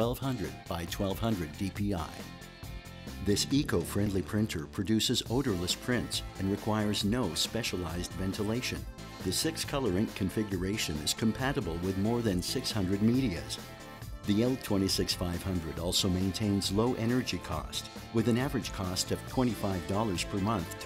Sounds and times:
Speech: 0.0s - 2.3s, 3.2s - 13.6s, 14.3s - 20.8s
Music: 0.0s - 20.8s.

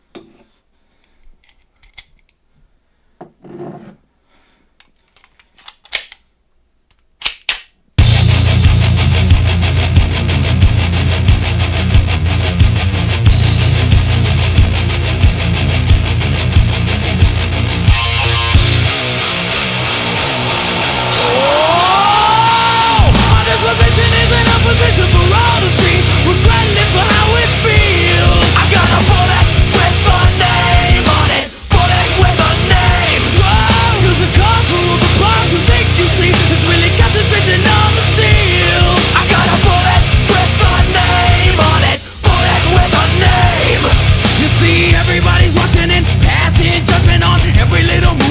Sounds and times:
Music: 8.0s - 48.3s.

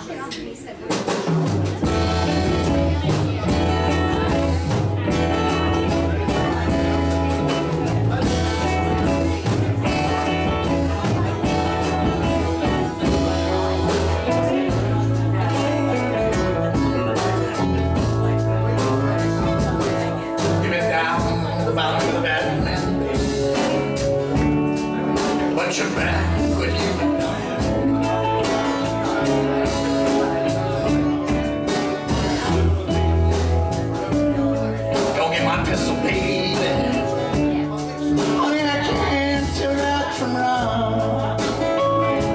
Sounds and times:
Music: 0.0s - 42.3s
Speech: 0.0s - 42.3s.

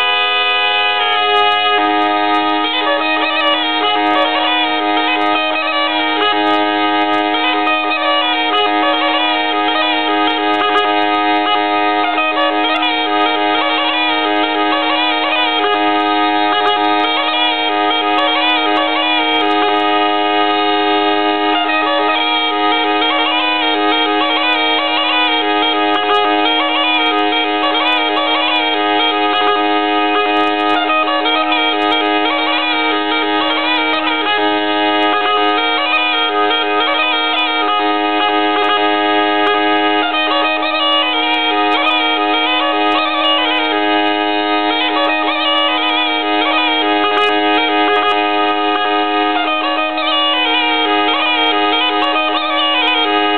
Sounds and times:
Bagpipes: 0.0s - 53.3s
Wind instrument, woodwind instrument: 0.0s - 53.3s.

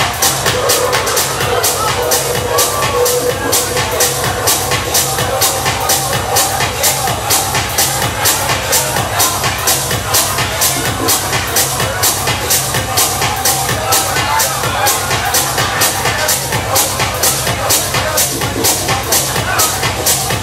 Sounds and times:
Speech: 0.0s - 20.4s
Techno: 0.0s - 20.4s.

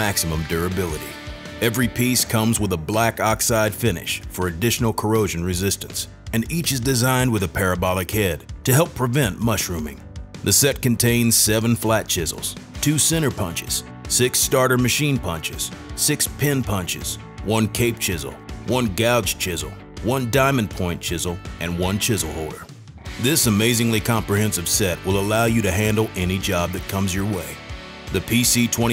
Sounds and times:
Music: 0.0s - 28.9s
Speech: 0.0s - 28.9s.

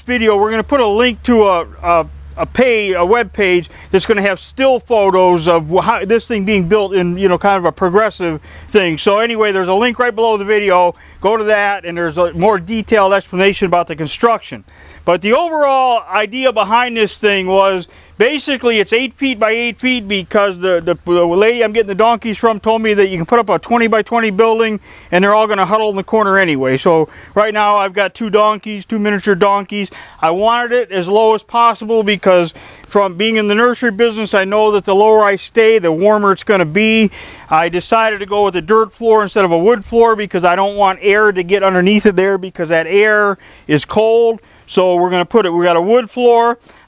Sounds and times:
Speech: 0.0s - 46.6s.

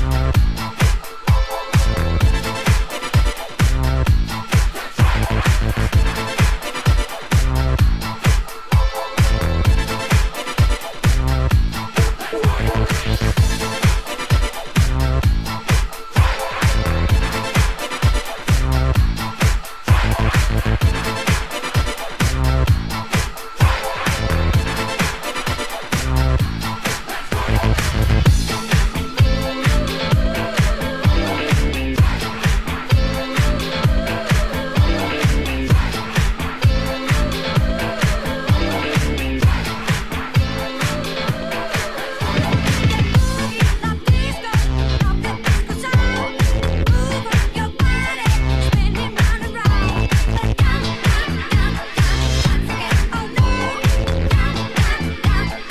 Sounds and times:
Dance music: 0.0s - 55.7s.

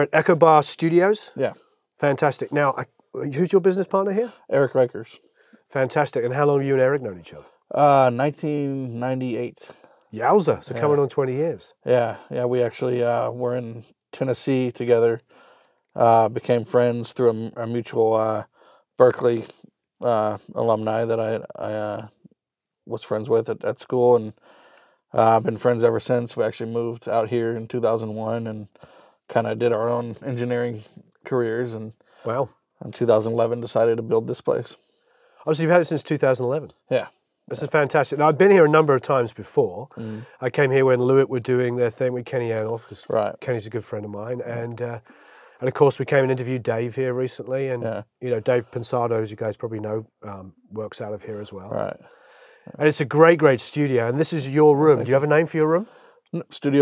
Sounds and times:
Speech: 0.0s - 15.3s, 16.0s - 22.2s, 22.9s - 24.4s, 25.2s - 34.8s, 35.4s - 52.1s, 52.7s - 56.8s.

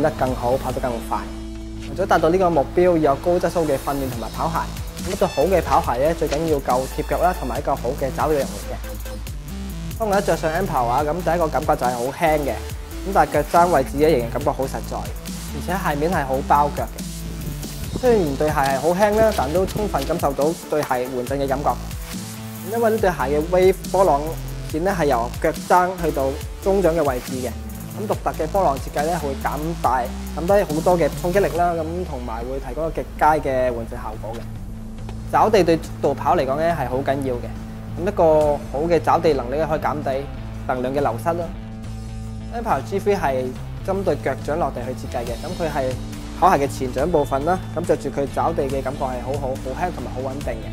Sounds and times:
Speech: 0.0s - 8.8s, 10.0s - 17.0s, 18.0s - 21.8s, 22.6s - 34.5s, 35.3s - 41.6s, 42.5s - 50.7s
Music: 0.0s - 50.7s.

